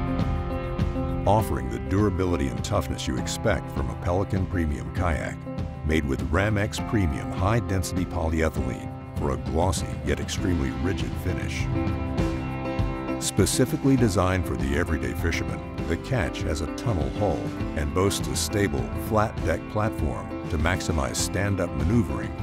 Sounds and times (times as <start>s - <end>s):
Music: 0.0s - 22.4s
Speech: 1.3s - 11.7s, 13.2s - 22.4s.